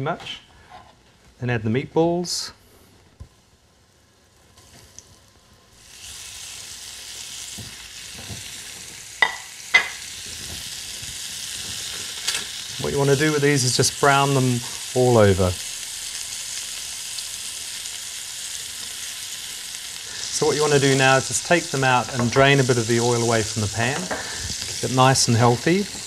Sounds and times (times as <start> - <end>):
Sizzle: 3.2 - 26.0
Frying (food): 3.4 - 26.0.